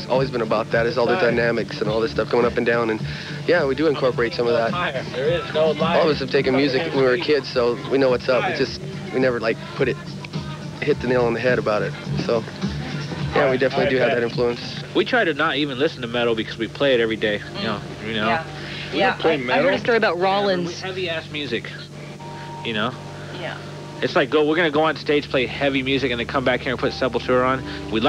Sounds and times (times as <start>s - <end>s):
Speech: 0.0s - 10.0s, 10.8s - 12.5s, 13.3s - 21.9s, 22.7s - 28.0s.